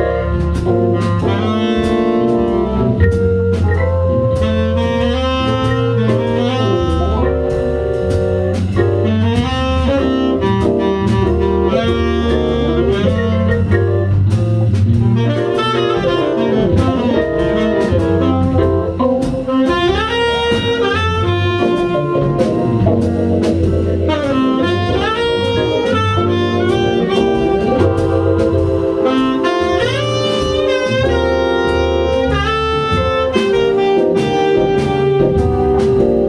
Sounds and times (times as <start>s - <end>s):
Hammond organ: 0.0s - 36.2s.